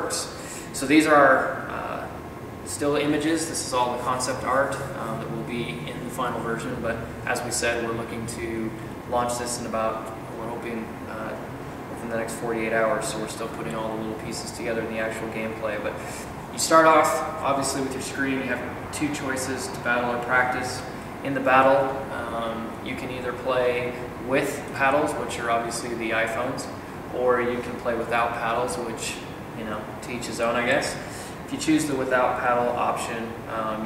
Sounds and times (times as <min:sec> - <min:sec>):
Speech: 0:00.0 - 0:33.8.